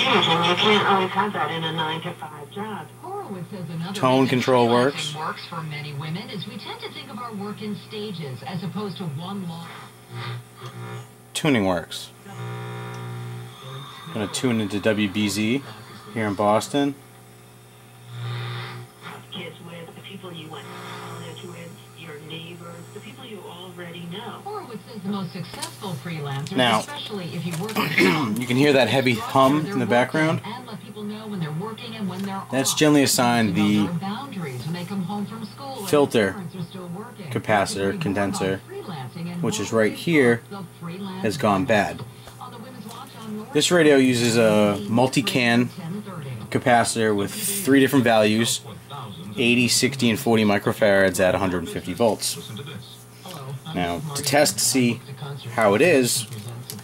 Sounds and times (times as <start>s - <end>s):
Radio: 0.0s - 56.8s
Speech: 19.1s - 56.8s.